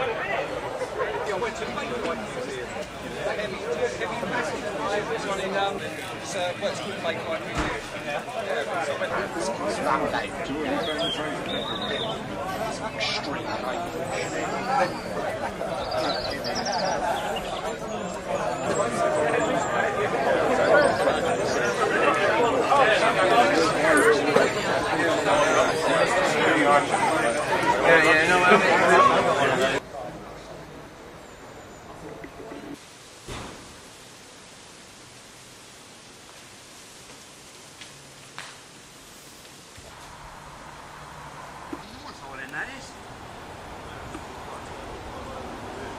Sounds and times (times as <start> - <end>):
Speech: 0.0 - 30.9.